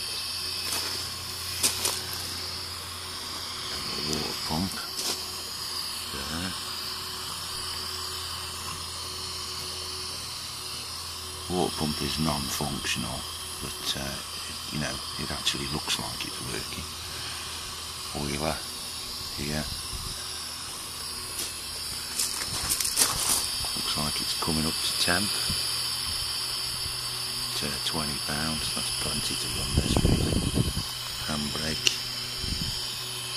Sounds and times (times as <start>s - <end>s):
Engine: 0.0s - 33.3s
Speech: 3.8s - 5.0s, 6.1s - 6.6s, 11.5s - 16.9s, 18.1s - 18.7s, 19.4s - 19.8s, 23.8s - 25.6s, 27.5s - 30.2s, 31.2s - 32.0s.